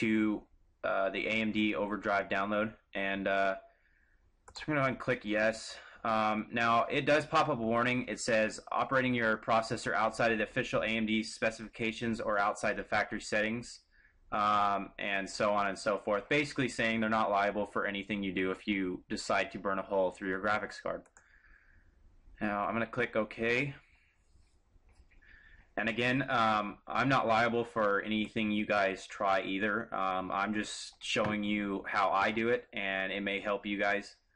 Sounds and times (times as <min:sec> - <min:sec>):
Clicking: 0:21.0 - 0:21.3.